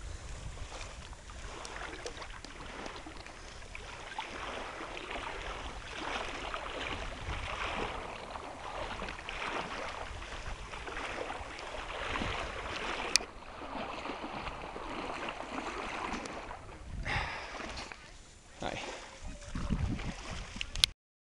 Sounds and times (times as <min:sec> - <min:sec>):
Wind noise (microphone): 0:00.0 - 0:02.9, 0:05.2 - 0:13.2, 0:16.1 - 0:17.9, 0:19.2 - 0:20.9
Sailboat, sailing ship: 0:00.0 - 0:20.9.